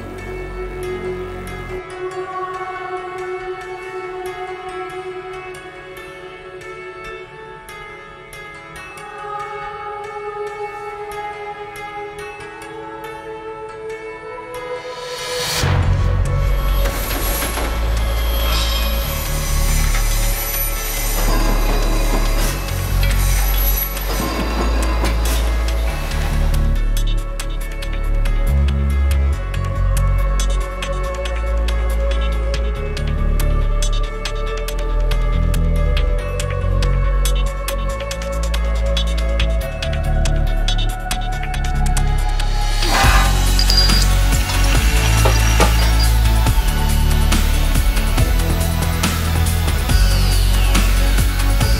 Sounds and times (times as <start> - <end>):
Music: 0.0 - 51.7.